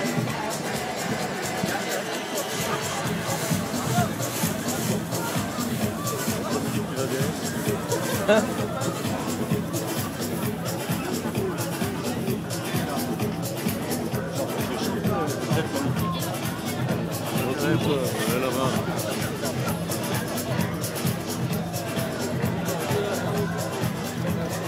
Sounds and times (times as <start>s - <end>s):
Music: 0.0s - 24.6s
Speech: 0.0s - 24.6s.